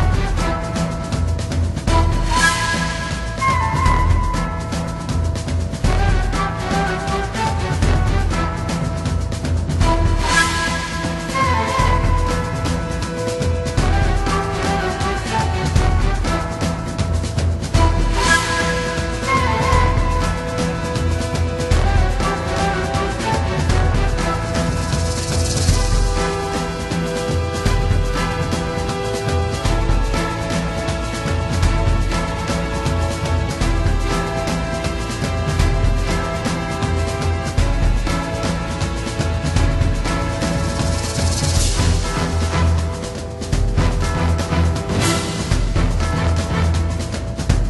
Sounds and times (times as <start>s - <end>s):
Video game music: 0.0s - 47.6s.